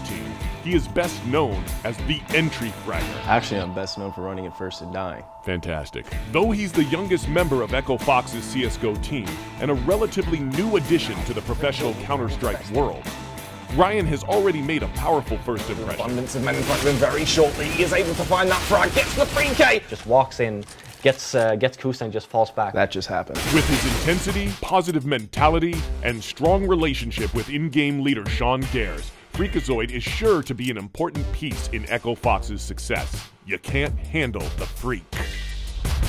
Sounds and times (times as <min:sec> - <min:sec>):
Speech: 0:00.0 - 0:13.0, 0:13.7 - 0:35.5
Music: 0:00.0 - 0:19.8, 0:23.4 - 0:36.0.